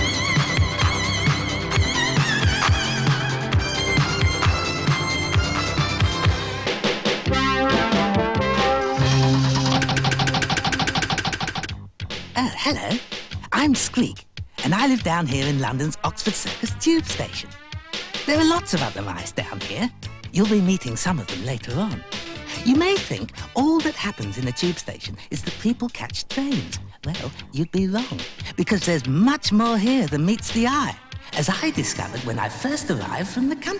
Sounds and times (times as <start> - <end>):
Music: 0.0 - 33.7
Speech: 12.4 - 17.6, 18.3 - 33.7.